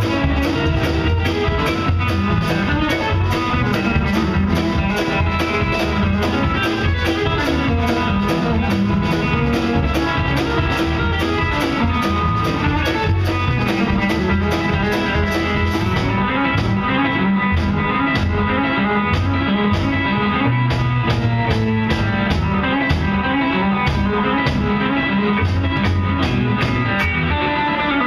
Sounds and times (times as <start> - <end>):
Bass guitar: 0.0 - 28.0.